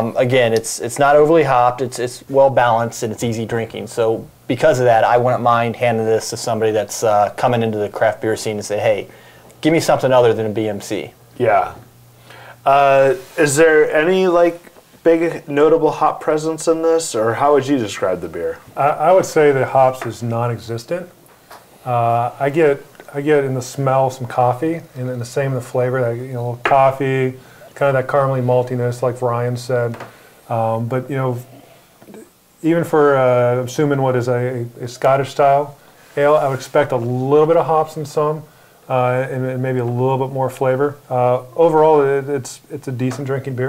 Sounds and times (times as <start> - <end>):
Speech: 0.0 - 11.9, 12.6 - 21.2, 21.8 - 43.6.